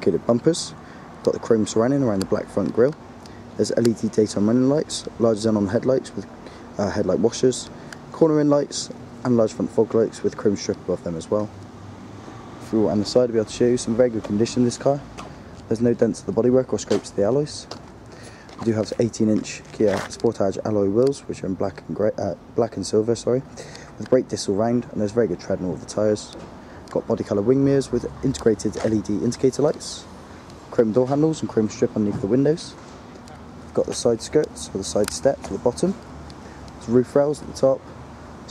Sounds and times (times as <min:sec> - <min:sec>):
Speech: 0:00.0 - 0:03.0, 0:03.6 - 0:11.6, 0:12.6 - 0:15.1, 0:15.7 - 0:17.8, 0:18.6 - 0:30.1, 0:30.7 - 0:36.0, 0:36.8 - 0:37.8.